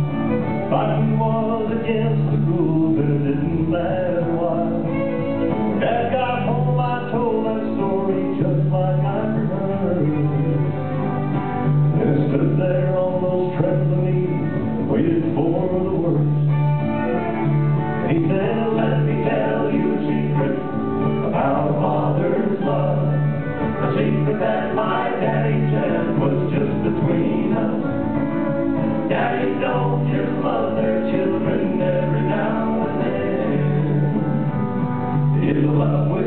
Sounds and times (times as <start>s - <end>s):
Male singing: 0.7s - 5.0s, 5.8s - 10.6s, 12.0s - 16.3s, 18.0s - 23.2s, 23.8s - 28.0s, 29.1s - 34.4s, 35.4s - 36.2s.